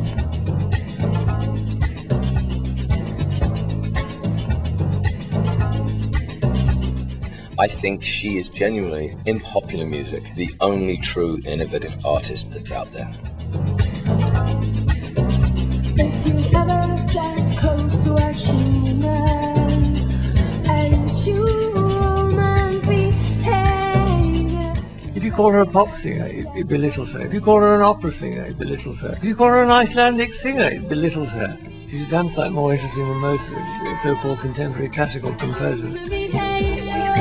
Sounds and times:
Music: 0:00.0 - 0:37.2
Speech: 0:07.6 - 0:13.2, 0:25.2 - 0:36.0.

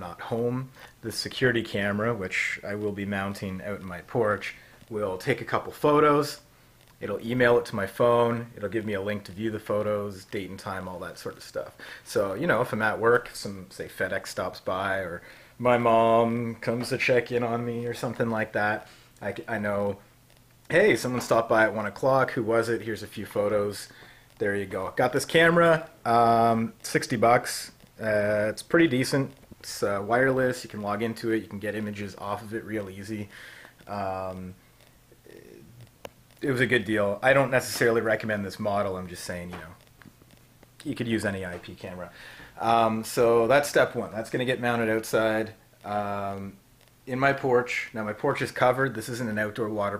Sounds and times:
Speech: 0:00.0 - 0:20.0, 0:20.7 - 0:34.6, 0:35.2 - 0:35.8, 0:36.4 - 0:39.8, 0:40.8 - 0:49.9.

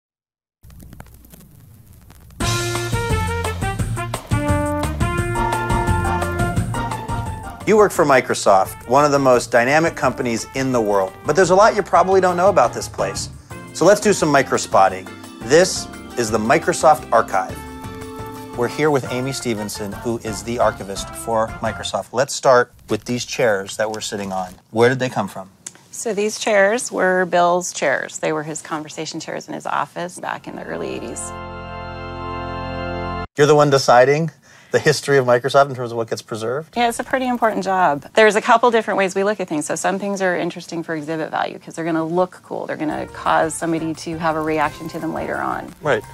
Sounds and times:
Music: 0:02.4 - 0:22.0, 0:30.5 - 0:33.3, 0:42.7 - 0:46.1
Speech: 0:07.7 - 0:17.6, 0:18.6 - 0:31.3, 0:33.4 - 0:46.0.

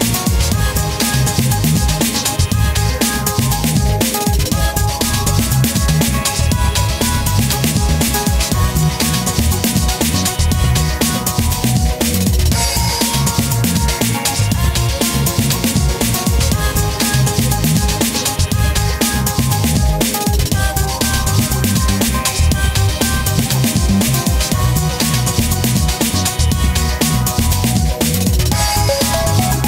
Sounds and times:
Drum and bass: 0:00.0 - 0:29.6.

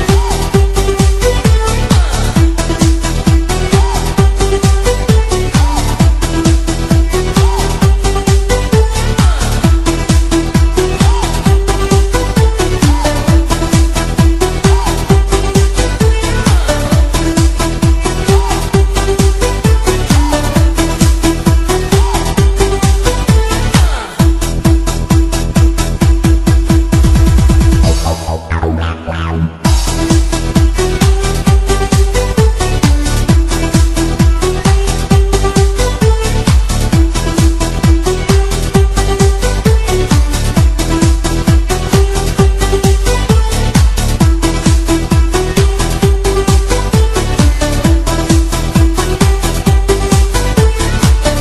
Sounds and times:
Music: 0:00.0 - 0:51.4.

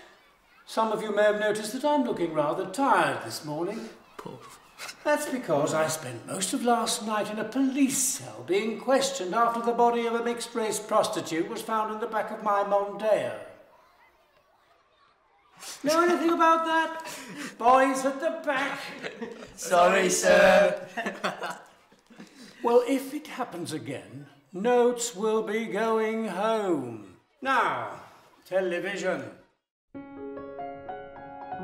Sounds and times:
Speech: 0:00.6 - 0:13.6, 0:15.8 - 0:20.9, 0:22.6 - 0:29.4.

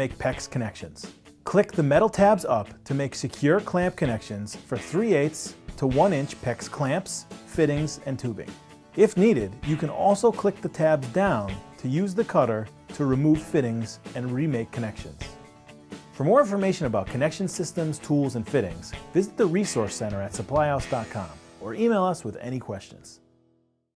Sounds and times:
Speech: 0:00.0 - 0:15.3, 0:16.2 - 0:23.2
Music: 0:00.0 - 0:23.9.

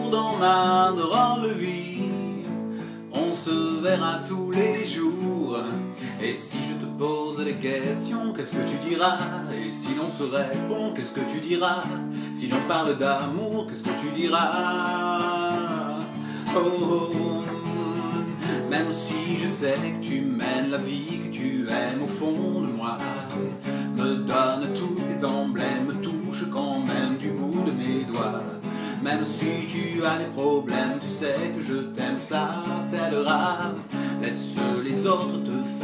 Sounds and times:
Music: 0:00.0 - 0:35.8.

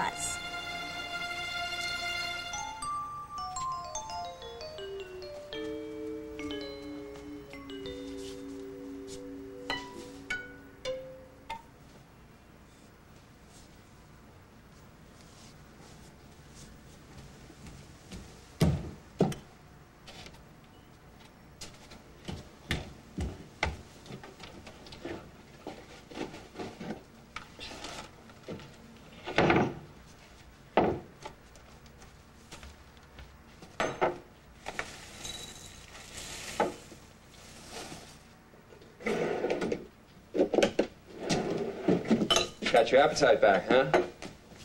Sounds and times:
Music: 0:00.0 - 0:11.7.

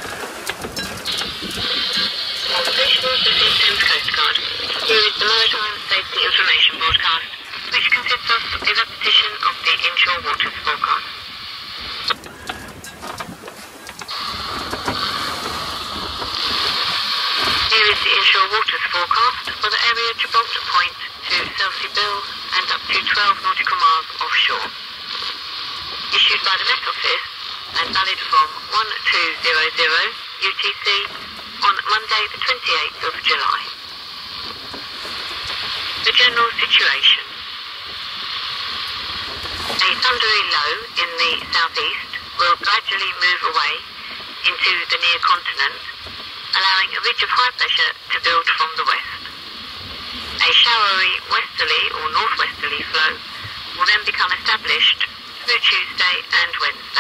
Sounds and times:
Boat, Water vehicle: 0:00.0 - 0:57.0
Speech: 0:02.5 - 0:11.1, 0:17.7 - 0:24.8, 0:26.1 - 0:33.8, 0:36.0 - 0:37.4, 0:39.8 - 0:49.3, 0:50.4 - 0:53.2, 0:53.8 - 0:57.0.

